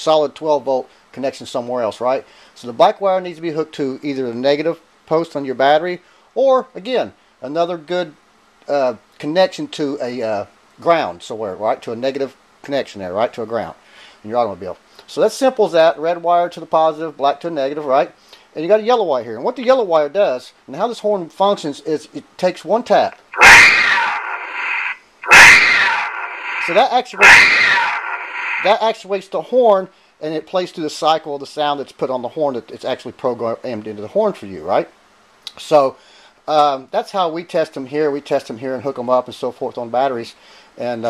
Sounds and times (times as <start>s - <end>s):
Speech: 0.0s - 23.2s, 26.6s - 28.0s, 28.6s - 41.1s.